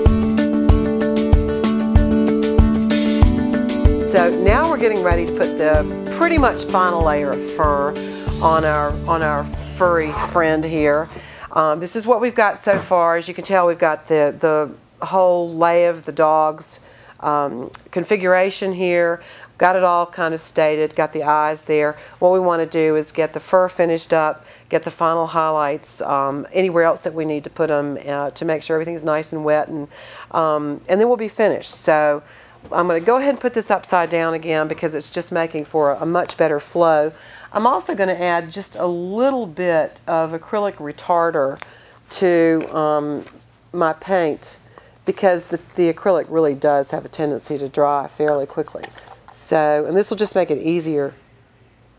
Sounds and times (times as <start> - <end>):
Speech: 4.1 - 51.2.